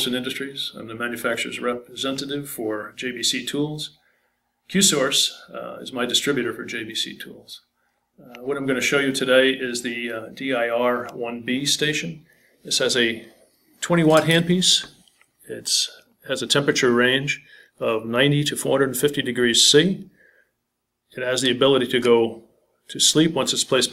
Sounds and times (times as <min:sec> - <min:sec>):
Speech: 0:00.0 - 0:04.0, 0:04.7 - 0:20.1, 0:21.1 - 0:23.9.